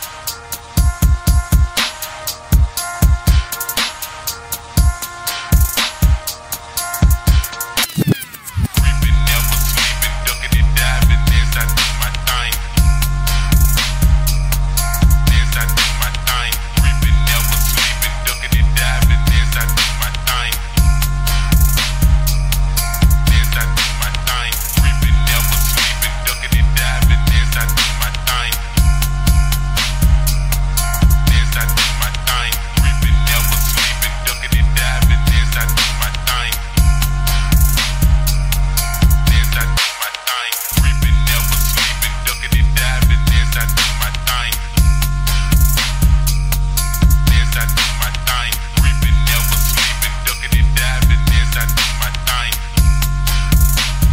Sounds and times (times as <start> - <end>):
Music: 0.0 - 54.1.